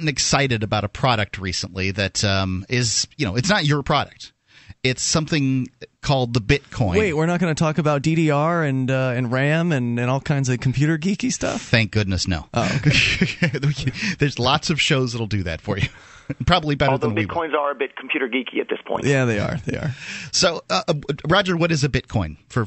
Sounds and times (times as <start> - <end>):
Speech: 0.0 - 22.6.